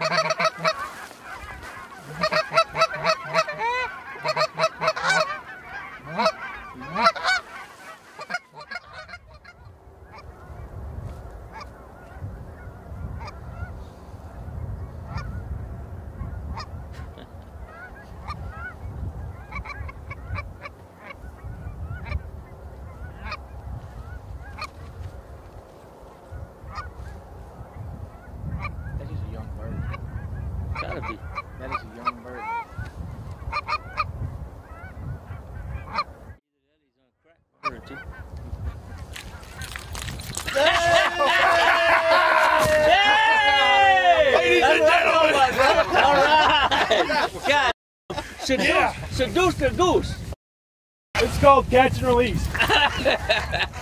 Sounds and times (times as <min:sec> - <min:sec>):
Honk: 0:00.0 - 0:10.8, 0:11.5 - 0:13.9, 0:14.6 - 0:15.6, 0:16.2 - 0:25.1, 0:26.3 - 0:29.0, 0:29.6 - 0:36.4, 0:37.6 - 0:41.6.